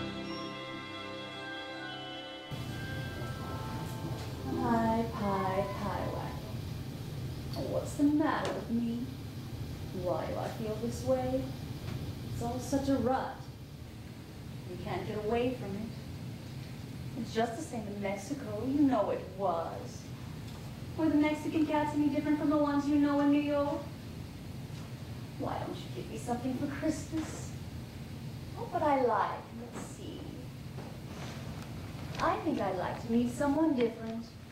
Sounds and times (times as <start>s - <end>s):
Speech: 4.5s - 6.6s, 7.6s - 9.1s, 9.9s - 11.5s, 12.4s - 13.5s, 14.7s - 16.0s, 17.2s - 20.1s, 21.0s - 23.9s, 25.4s - 27.6s, 28.6s - 30.5s, 32.2s - 34.4s.